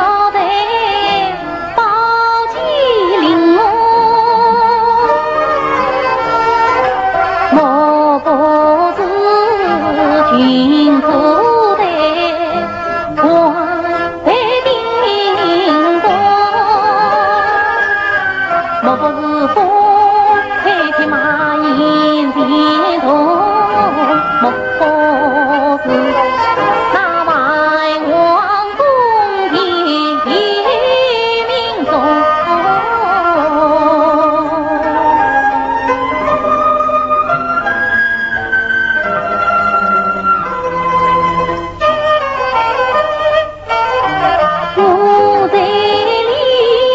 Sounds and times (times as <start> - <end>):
Music: 0.0 - 46.9.